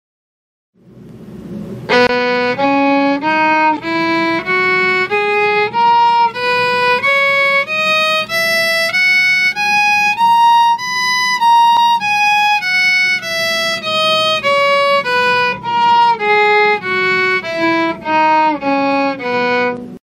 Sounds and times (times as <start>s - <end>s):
Violin, fiddle: 1.9s - 20.0s.